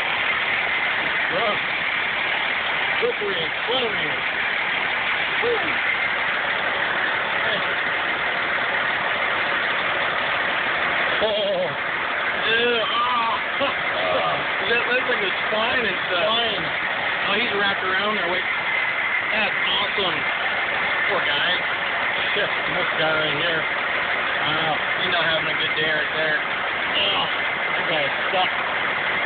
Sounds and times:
Idling: 0:00.0 - 0:29.2
Speech: 0:01.3 - 0:01.6, 0:03.0 - 0:04.2, 0:07.4 - 0:07.7, 0:11.2 - 0:11.8, 0:12.4 - 0:18.5, 0:19.3 - 0:20.3, 0:21.1 - 0:21.6, 0:22.2 - 0:23.7, 0:24.4 - 0:26.4, 0:27.0 - 0:28.6.

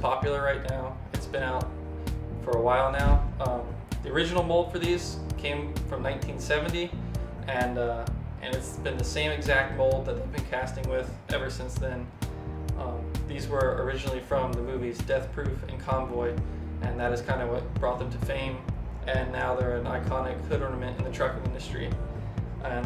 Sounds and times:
Speech: 0:00.0 - 0:01.7, 0:02.4 - 0:12.1, 0:12.8 - 0:22.8
Music: 0:00.0 - 0:22.8.

